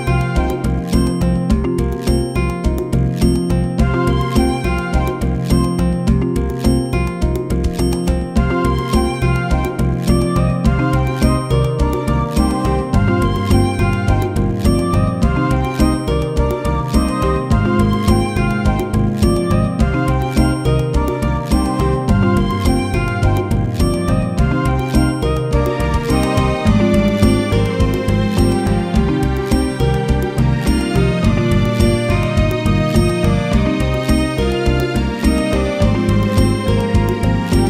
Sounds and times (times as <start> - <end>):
Music: 0.0 - 37.7.